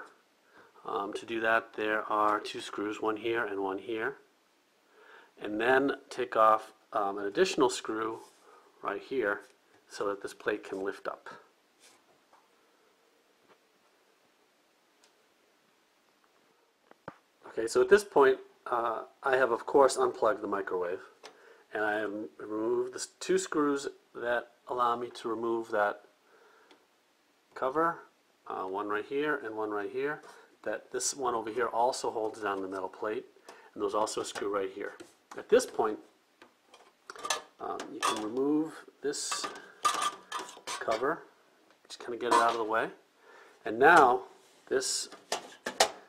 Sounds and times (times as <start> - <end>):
Speech: 0.8 - 4.3, 5.4 - 11.5, 17.4 - 26.1, 27.6 - 36.1, 37.6 - 39.6, 40.7 - 41.3, 41.9 - 43.0, 43.6 - 45.2.